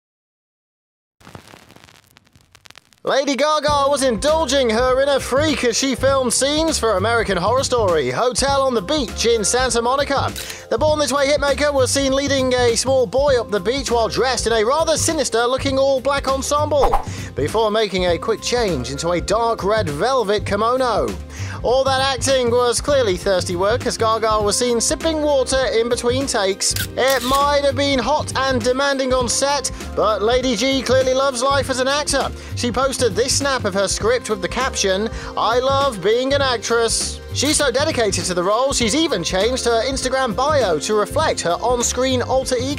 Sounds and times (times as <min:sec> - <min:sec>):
Music: 0:03.1 - 0:42.7
Speech: 0:03.1 - 0:42.7.